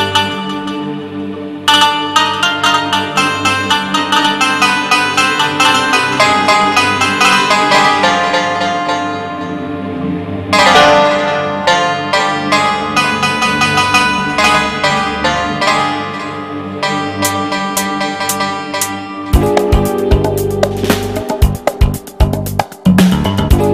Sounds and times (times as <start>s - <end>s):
Musical instrument: 0.0s - 23.7s.